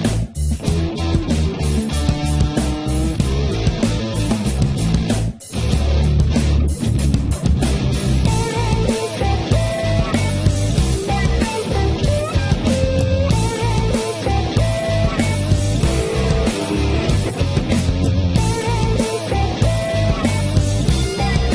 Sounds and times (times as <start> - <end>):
Music: 0.0 - 21.5.